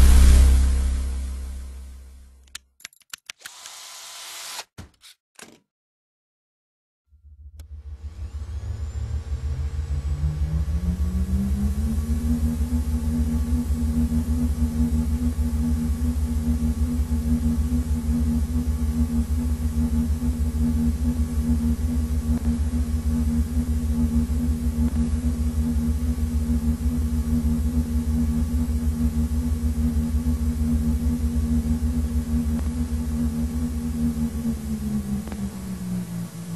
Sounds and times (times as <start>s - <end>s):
Pulse: 7.2s - 36.5s.